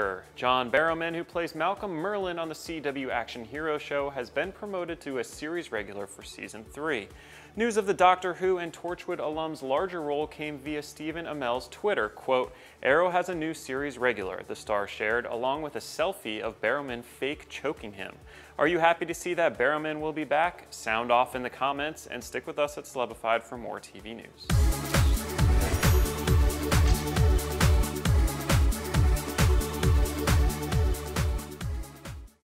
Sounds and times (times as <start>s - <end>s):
Speech: 0.0s - 24.5s
Music: 0.0s - 32.5s.